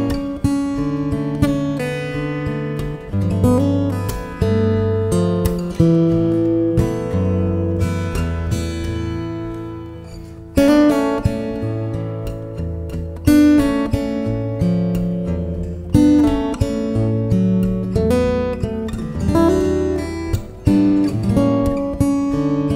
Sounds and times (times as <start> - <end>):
Acoustic guitar: 0.0 - 22.7
Strum: 0.0 - 22.7.